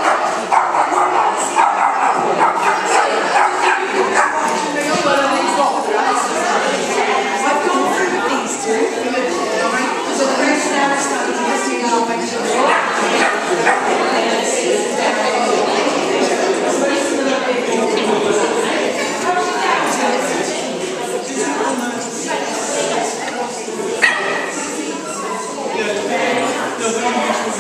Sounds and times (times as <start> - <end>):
Speech: 0.0 - 27.6.